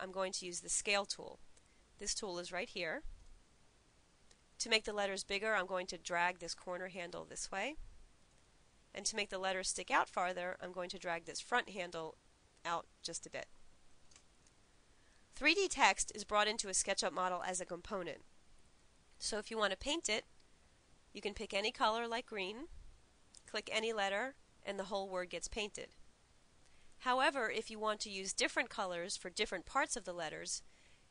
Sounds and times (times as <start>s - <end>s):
Narration, monologue: 0.0s - 31.1s.